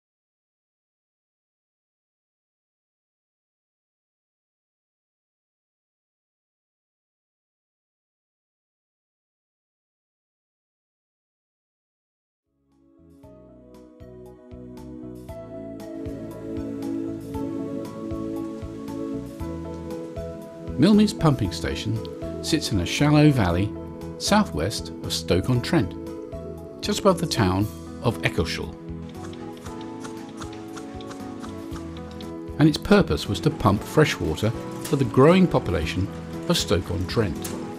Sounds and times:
Music: 12.5s - 37.7s
Speech: 20.8s - 26.0s, 26.8s - 28.8s, 32.6s - 37.6s.

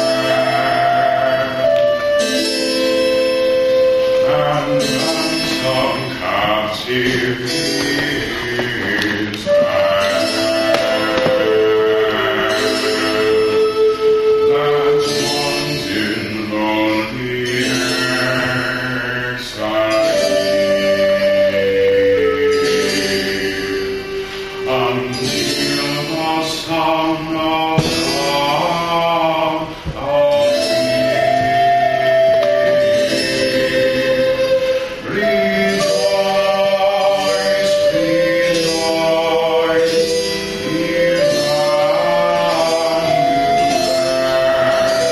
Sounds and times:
Chant: 0.0s - 45.1s.

